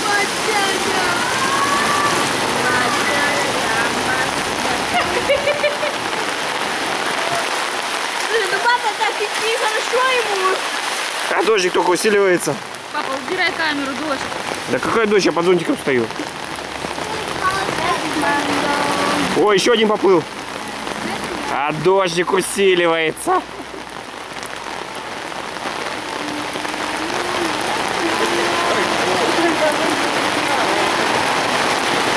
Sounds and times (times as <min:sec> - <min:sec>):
Rain on surface: 0:00.0 - 0:32.1
Raindrop: 0:00.0 - 0:32.1.